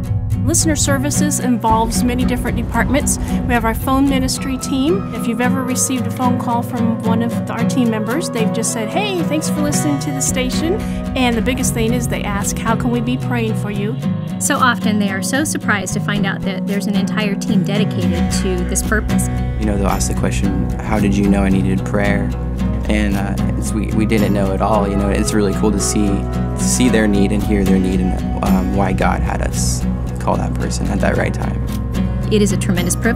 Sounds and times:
Music: 0:00.0 - 0:33.1
Speech: 0:00.5 - 0:22.3, 0:22.9 - 0:31.6, 0:32.3 - 0:33.1.

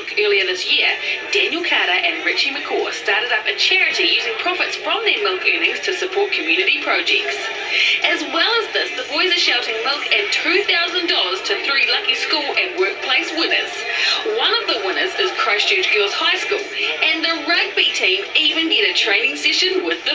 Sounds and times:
Speech: 0:00.0 - 0:20.1.

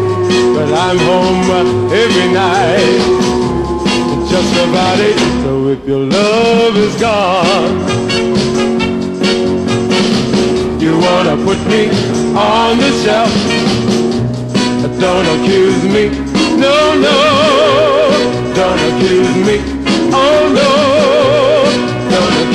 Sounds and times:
Music: 0:00.0 - 0:22.5.

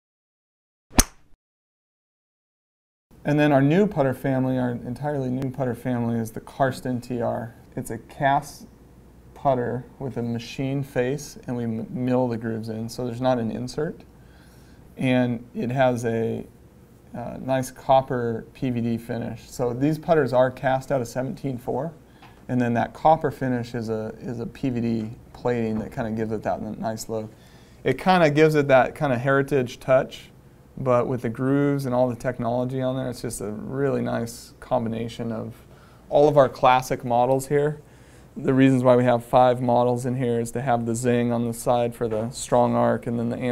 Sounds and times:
Speech: 0:03.2 - 0:08.8, 0:09.4 - 0:14.1, 0:15.0 - 0:16.5, 0:17.1 - 0:43.5.

